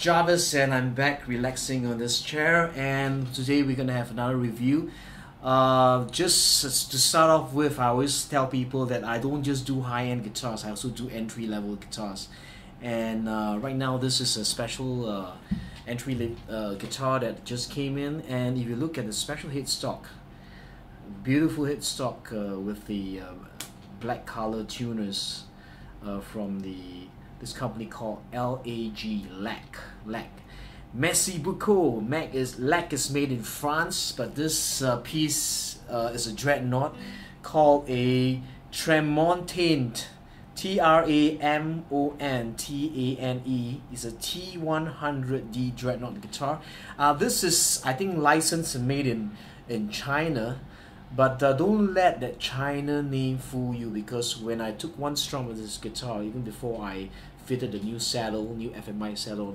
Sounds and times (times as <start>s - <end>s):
Speech: 0.0s - 20.2s, 21.0s - 59.5s.